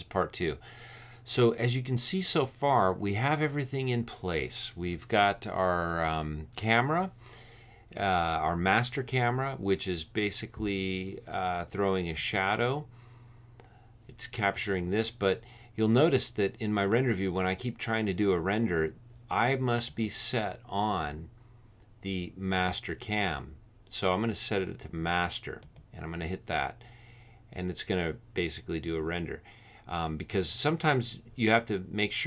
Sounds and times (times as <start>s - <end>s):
Speech: 0.0s - 0.6s, 1.3s - 7.2s, 8.0s - 12.9s, 14.1s - 21.3s, 22.0s - 26.8s, 27.5s - 32.2s.